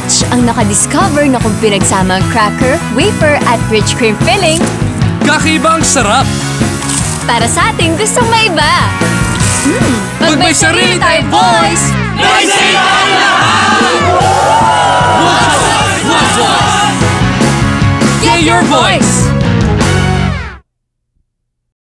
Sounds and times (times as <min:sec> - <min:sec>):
Music: 0:00.0 - 0:20.7.